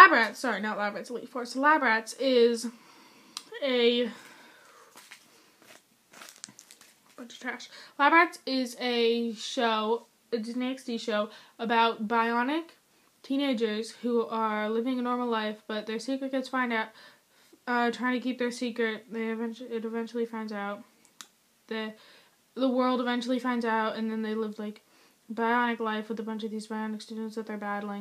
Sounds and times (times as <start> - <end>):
Speech: 0.0 - 2.7, 3.5 - 4.2, 7.2 - 16.9, 17.7 - 20.8, 21.7 - 22.0, 22.6 - 28.0.